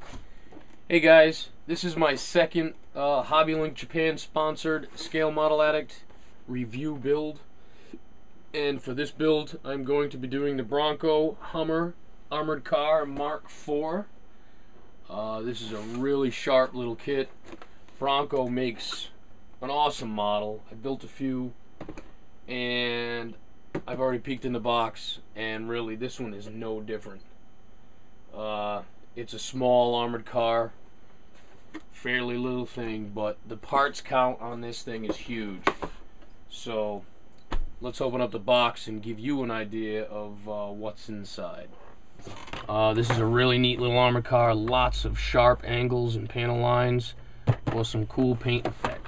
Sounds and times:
Speech: 0.9 - 7.5, 8.5 - 14.1, 15.0 - 17.4, 18.0 - 21.6, 22.5 - 27.3, 28.3 - 30.8, 32.0 - 35.7, 36.5 - 37.1, 37.8 - 41.8, 42.7 - 49.0.

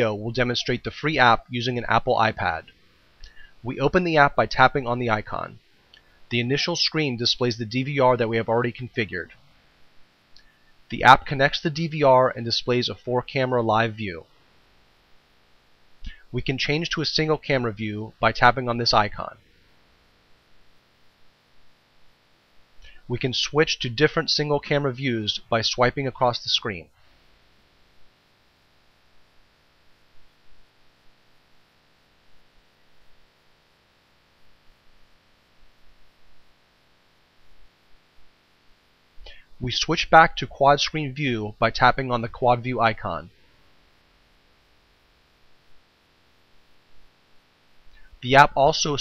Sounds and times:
Speech: 0.0 - 2.7, 3.6 - 5.6, 6.3 - 9.4, 10.9 - 14.3, 16.1 - 19.4, 23.0 - 27.0, 39.6 - 43.3, 48.2 - 49.0.

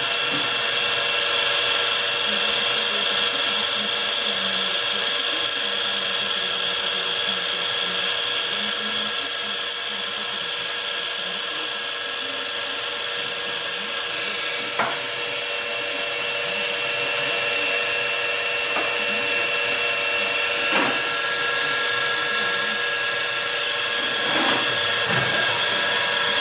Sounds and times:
Speech: 2.2 - 26.4.

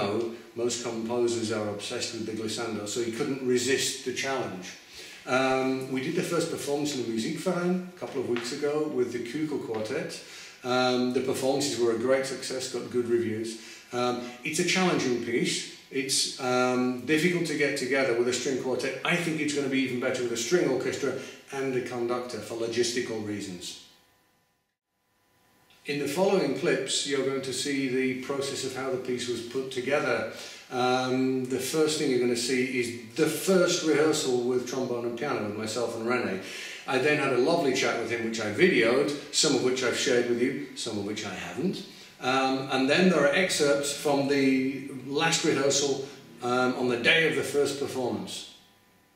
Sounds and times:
Speech: 0.0 - 23.8, 25.8 - 48.6.

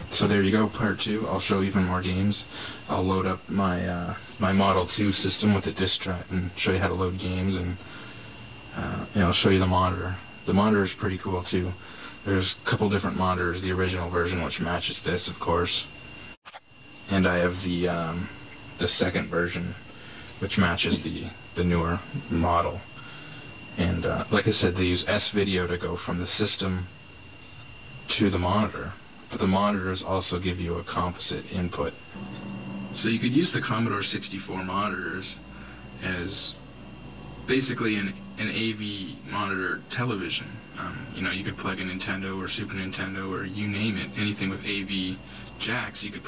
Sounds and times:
Speech: 0.0 - 7.9, 8.7 - 16.0, 17.0 - 23.0, 23.8 - 27.0, 28.0 - 32.1, 33.0 - 36.6, 37.5 - 46.2.

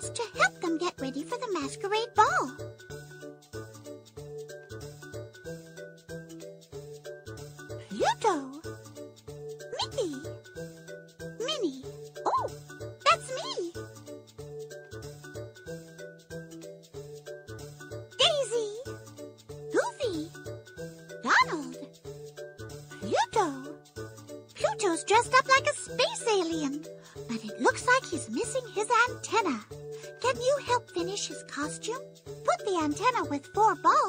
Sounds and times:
Speech: 0.0 - 2.6, 7.8 - 8.7, 9.6 - 10.4, 11.4 - 13.8, 18.2 - 18.9, 19.7 - 20.4, 21.2 - 21.9, 23.0 - 23.8, 24.6 - 34.0
Music: 0.0 - 34.0.

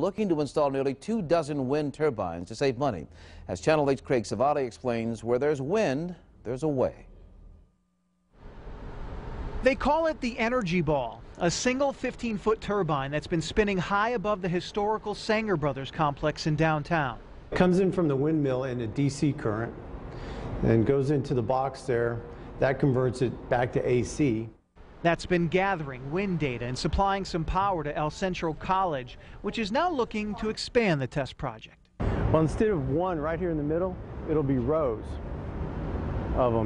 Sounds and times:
Speech: 0.0 - 7.1, 9.6 - 19.8, 20.6 - 35.2, 36.4 - 36.6.

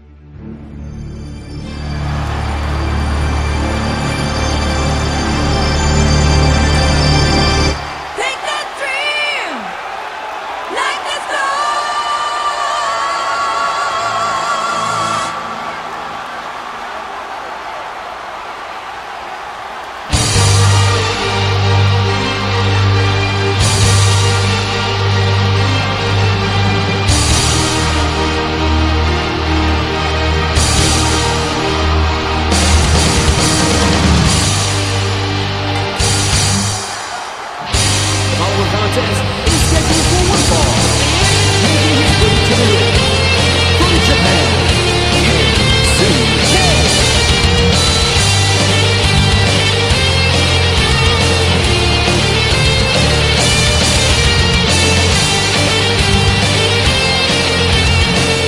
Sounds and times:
Music: 0.0 - 8.1, 13.2 - 17.5, 20.0 - 58.4
Speech: 8.2 - 9.7, 10.7 - 12.8, 38.3 - 43.0, 43.8 - 44.7, 45.8 - 46.9.

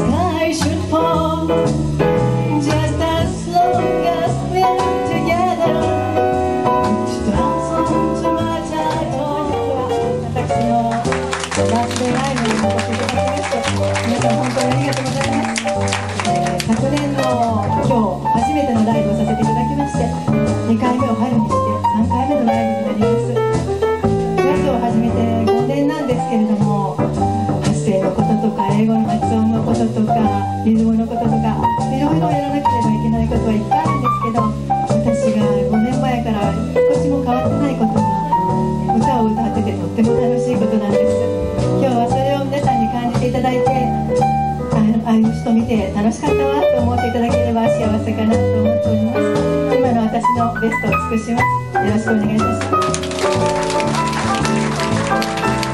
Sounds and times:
Music: 0.0 - 55.7
Speech: 6.8 - 23.4, 24.5 - 41.2, 41.8 - 44.1, 44.7 - 52.7.

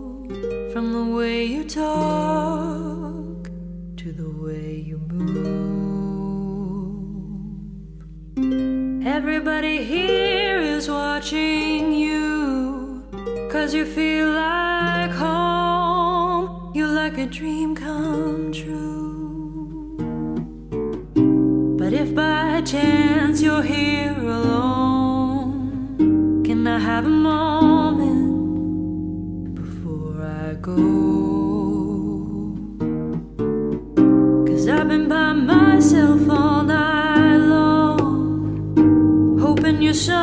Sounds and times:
Music: 0.0 - 40.2.

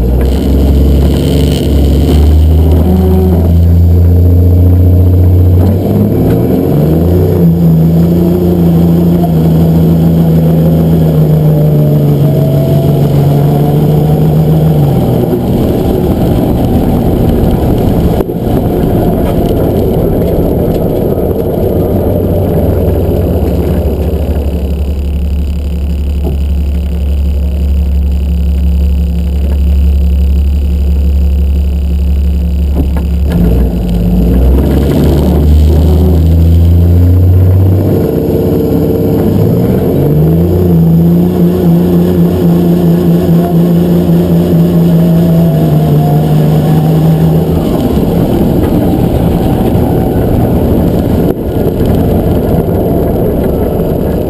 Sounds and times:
Car: 0.0 - 54.3.

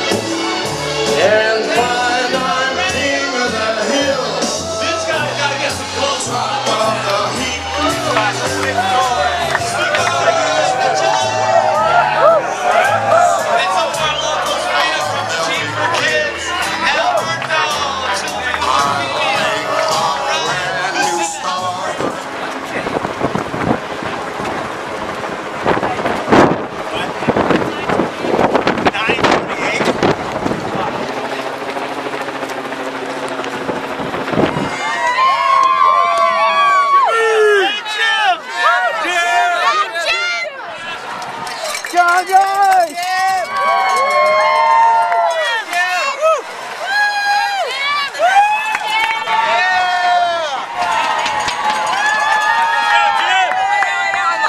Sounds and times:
Music: 0.0 - 22.6
Outside, urban or manmade: 0.0 - 54.4
Run: 8.0 - 16.2, 27.3 - 54.4
Speech: 13.5 - 23.0.

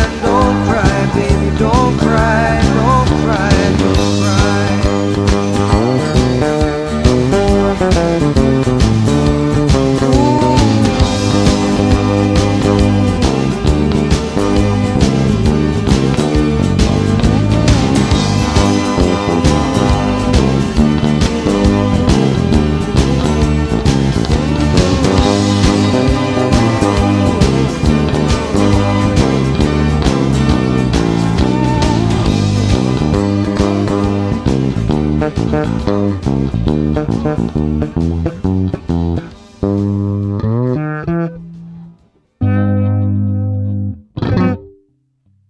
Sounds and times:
Bass guitar: 0.0 - 45.4.

